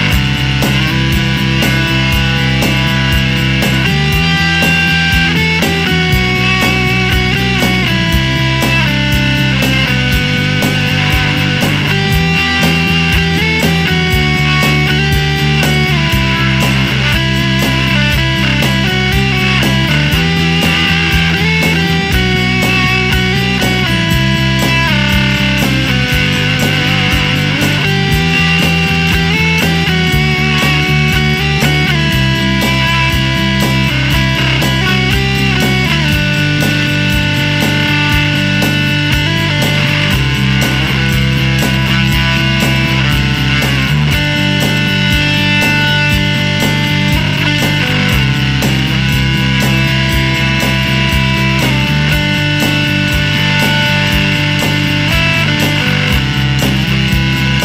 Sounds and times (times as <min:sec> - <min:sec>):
Distortion: 0:00.0 - 0:57.6
Music: 0:00.0 - 0:57.6.